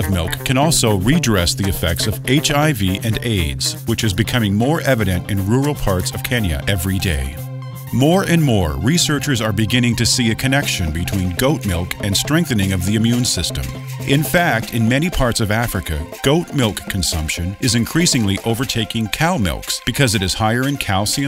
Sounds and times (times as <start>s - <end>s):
Music: 0.0s - 21.2s
Speech: 0.0s - 21.2s.